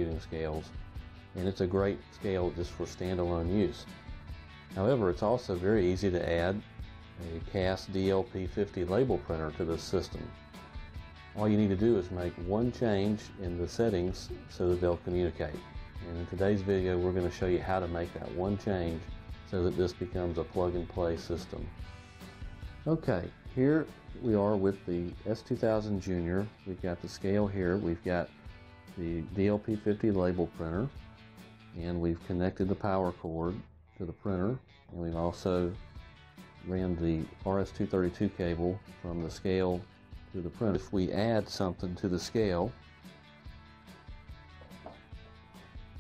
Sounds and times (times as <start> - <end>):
Speech: 0.0 - 0.8, 1.4 - 3.9, 4.7 - 6.6, 7.2 - 10.3, 11.4 - 21.7, 22.8 - 28.3, 29.0 - 30.9, 31.8 - 35.8, 36.6 - 42.8
Music: 0.0 - 46.0.